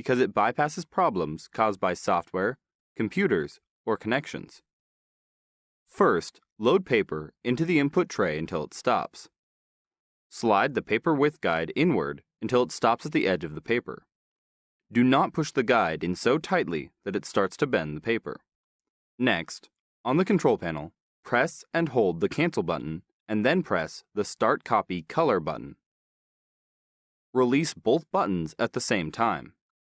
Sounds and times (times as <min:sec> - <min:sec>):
Speech: 0:00.0 - 0:04.7, 0:05.9 - 0:09.3, 0:10.3 - 0:14.1, 0:14.9 - 0:18.4, 0:19.2 - 0:25.8, 0:27.4 - 0:29.6.